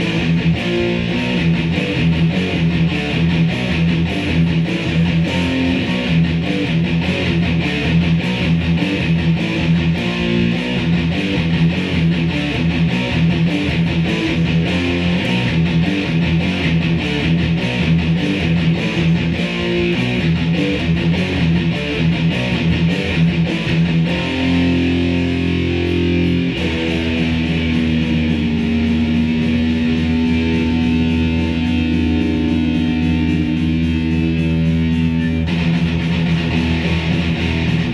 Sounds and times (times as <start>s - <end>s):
Bass guitar: 0.0s - 37.9s
Strum: 0.0s - 37.9s.